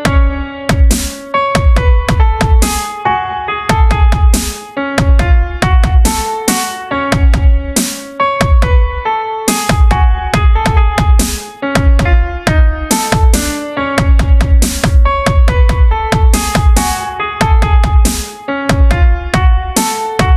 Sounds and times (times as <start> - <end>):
Dubstep: 0.0 - 3.1, 3.7 - 8.7, 9.5 - 20.3.